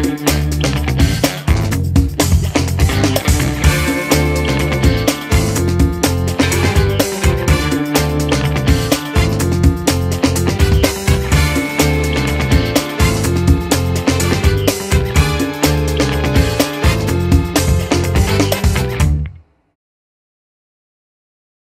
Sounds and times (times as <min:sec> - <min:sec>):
Music: 0:00.0 - 0:19.8.